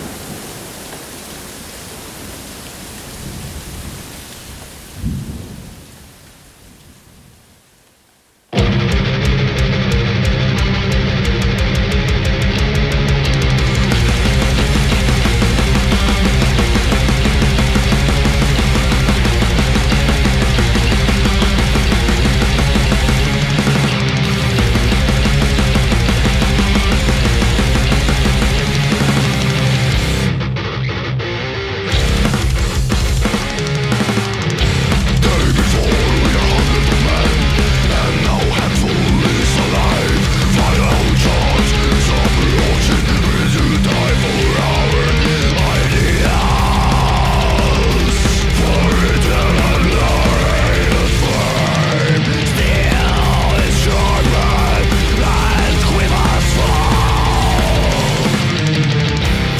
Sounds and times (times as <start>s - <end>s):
Music: 8.5s - 59.5s.